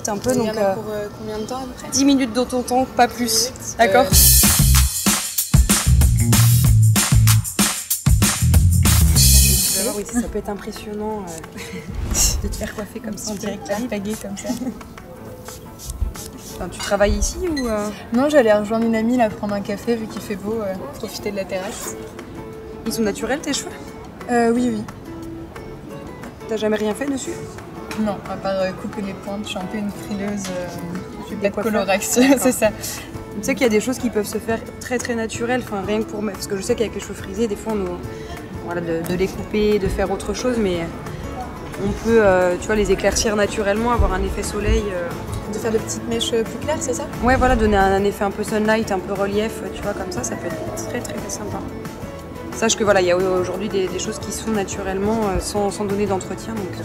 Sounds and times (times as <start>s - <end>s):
Music: 0.0s - 56.8s.